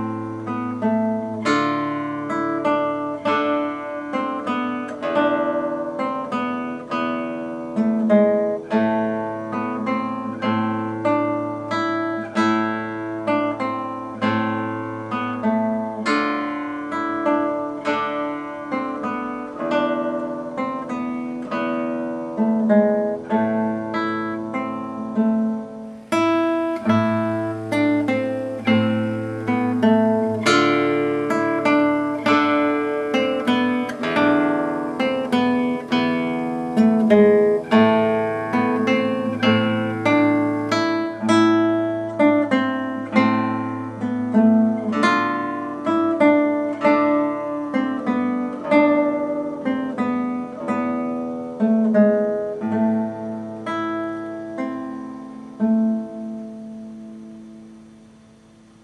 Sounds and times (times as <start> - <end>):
Acoustic guitar: 0.0 - 58.8
Strum: 0.0 - 58.8.